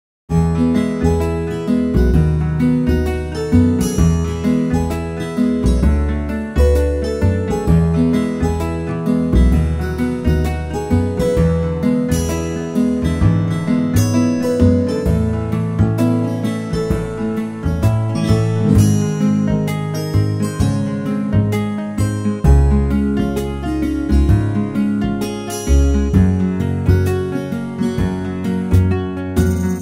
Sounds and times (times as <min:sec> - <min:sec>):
Music: 0:00.3 - 0:29.8.